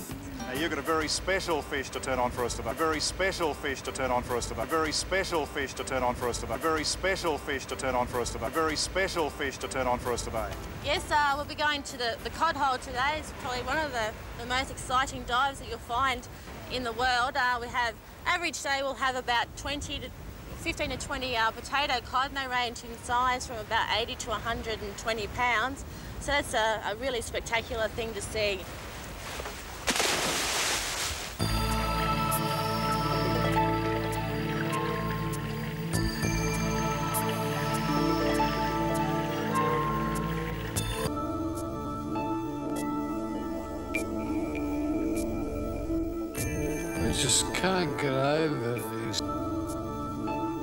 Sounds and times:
Speech: 0:00.5 - 0:28.6, 0:47.0 - 0:49.2.

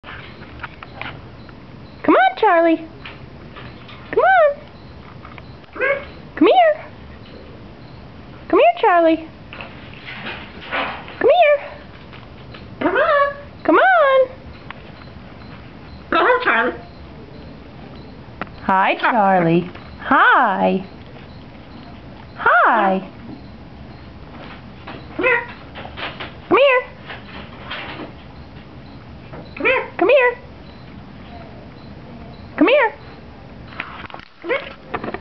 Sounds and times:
Domestic animals, pets: 0:00.1 - 0:08.1, 0:09.5 - 0:35.1.

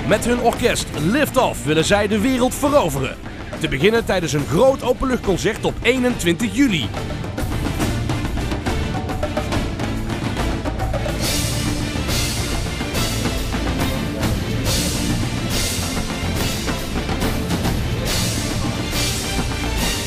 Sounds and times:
Speech: 0:00.0 - 0:07.0
Percussion: 0:00.0 - 0:20.0.

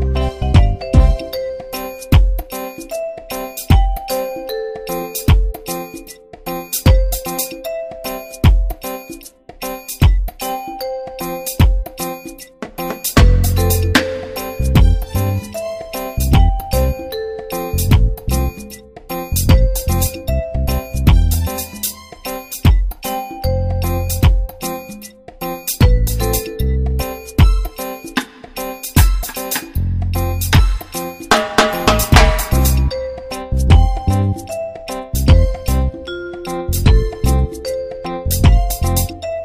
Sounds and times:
Music: 0:00.0 - 0:39.4.

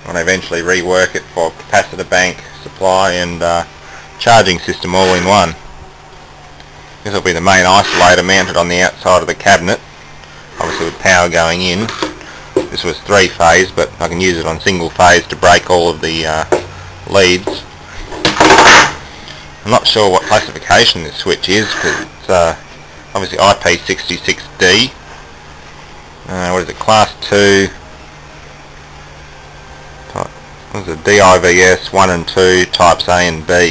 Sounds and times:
Speech: 0:00.0 - 0:05.6, 0:07.0 - 0:09.8, 0:10.6 - 0:12.0, 0:12.7 - 0:16.5, 0:17.1 - 0:17.7, 0:19.6 - 0:22.6, 0:23.2 - 0:25.0, 0:26.3 - 0:27.8, 0:30.1 - 0:33.7.

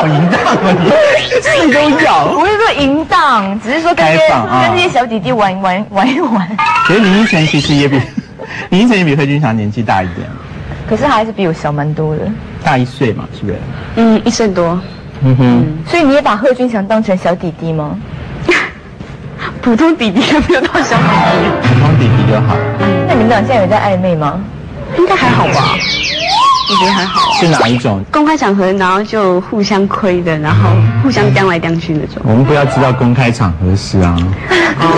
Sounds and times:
Music: 0:06.6 - 0:07.3, 0:20.8 - 0:24.0, 0:30.5 - 0:33.5.

